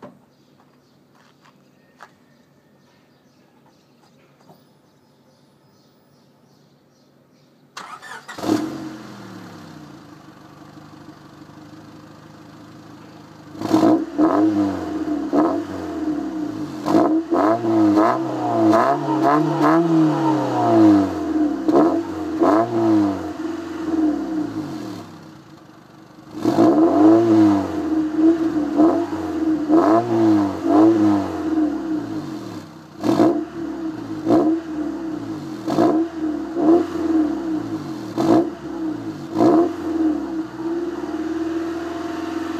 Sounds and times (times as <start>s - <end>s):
Car: 7.7s - 42.5s.